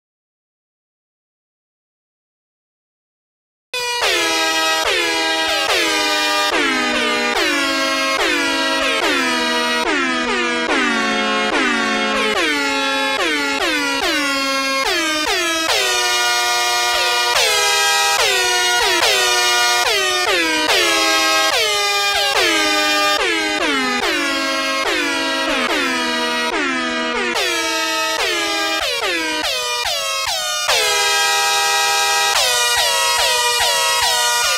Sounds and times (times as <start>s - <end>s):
Air horn, truck horn: 3.8s - 34.5s
Music: 3.8s - 34.5s.